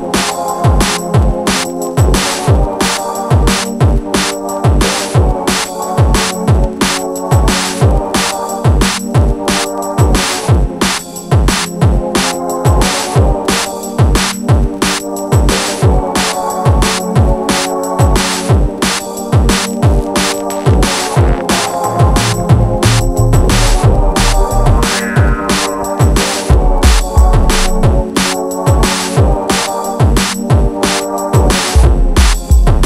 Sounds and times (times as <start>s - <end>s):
Drum: 0.0s - 32.8s
Drum kit: 0.0s - 32.8s.